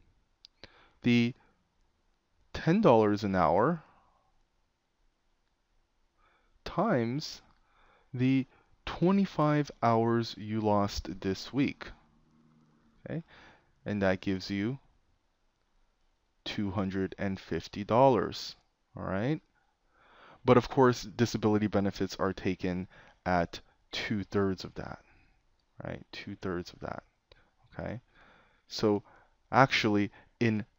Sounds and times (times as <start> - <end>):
Speech: 1.0 - 1.4, 2.6 - 3.9, 6.7 - 7.5, 8.2 - 12.0, 13.0 - 14.9, 16.5 - 19.5, 20.4 - 25.1, 25.8 - 27.1, 27.7 - 28.1, 28.7 - 30.7.